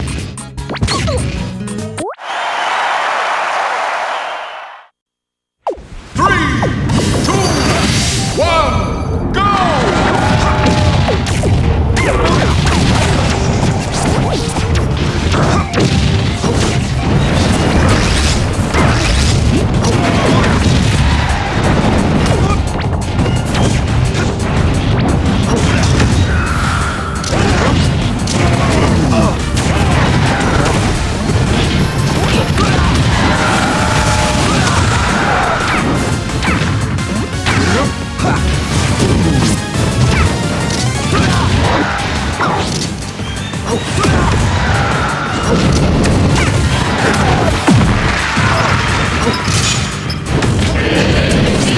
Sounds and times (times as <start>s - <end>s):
Music: 0.0s - 2.2s, 6.3s - 51.7s.